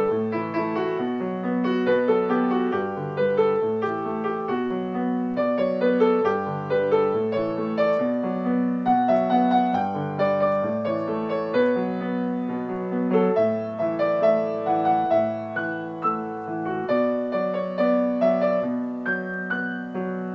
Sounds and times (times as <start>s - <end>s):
Piano: 0.0s - 20.3s.